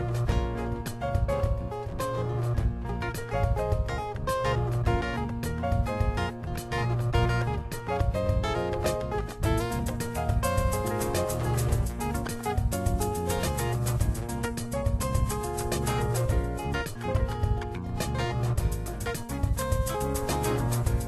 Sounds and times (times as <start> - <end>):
Music: 0.0 - 21.0.